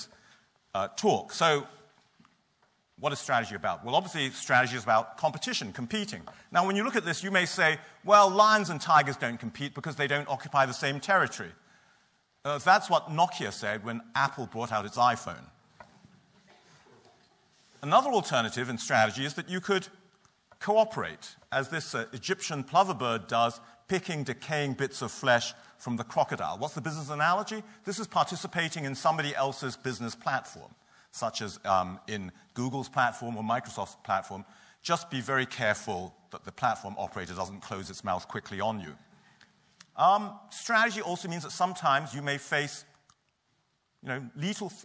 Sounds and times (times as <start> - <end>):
Speech: 0.7 - 1.9, 3.0 - 11.6, 12.4 - 15.6, 17.8 - 20.0, 20.6 - 39.1, 40.0 - 43.0, 44.0 - 44.8.